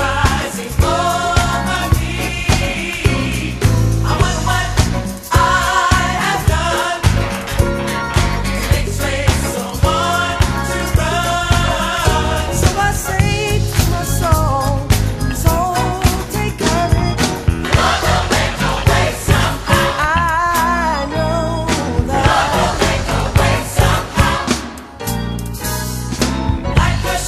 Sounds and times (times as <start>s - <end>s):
Choir: 0.0s - 12.9s, 17.6s - 20.1s, 22.0s - 24.9s, 26.7s - 27.2s.